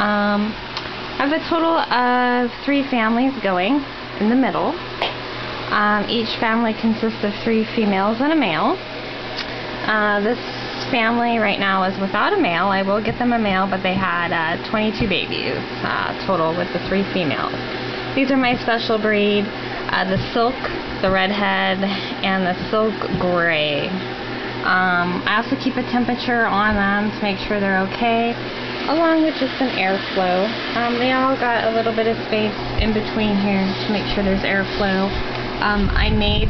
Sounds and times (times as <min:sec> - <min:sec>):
Speech: 0:00.0 - 0:00.6, 0:01.2 - 0:04.8, 0:05.7 - 0:08.8, 0:09.8 - 0:17.6, 0:18.2 - 0:24.0, 0:24.6 - 0:36.5.